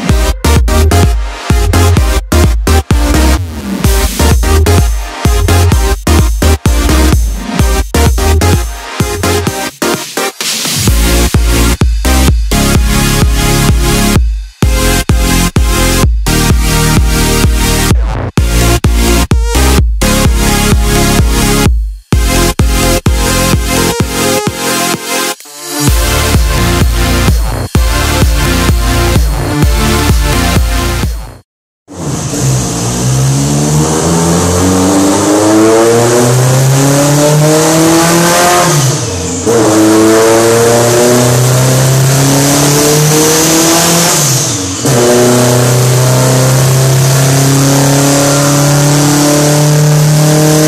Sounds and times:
Music: 0:00.0 - 0:33.1, 0:33.7 - 0:50.6
Car: 0:31.9 - 0:50.6.

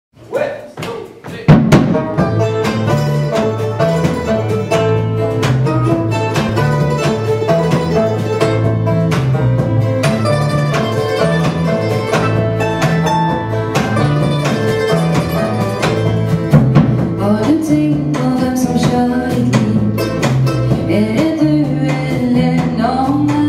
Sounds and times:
Speech: 0:00.2 - 0:01.6
Music: 0:00.4 - 0:23.4.

